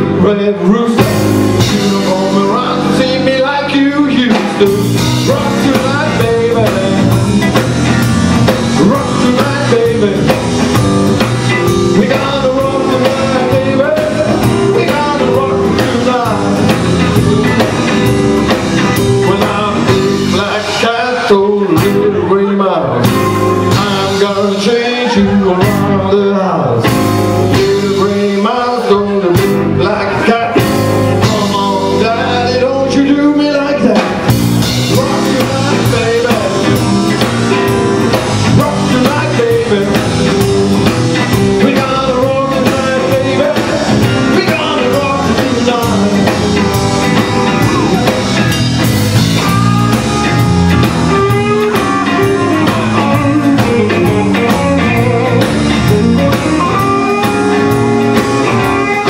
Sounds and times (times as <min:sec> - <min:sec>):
Blues: 0:00.0 - 0:59.1.